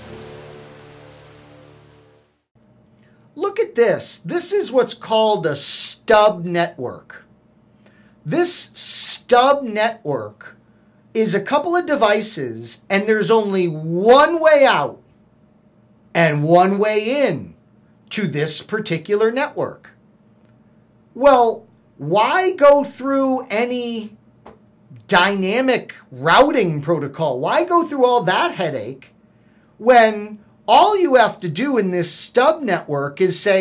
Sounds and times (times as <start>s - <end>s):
Speech: 3.4s - 7.3s, 8.3s - 10.6s, 11.2s - 15.0s, 16.1s - 20.0s, 21.2s - 24.2s, 24.9s - 29.2s, 29.8s - 33.6s.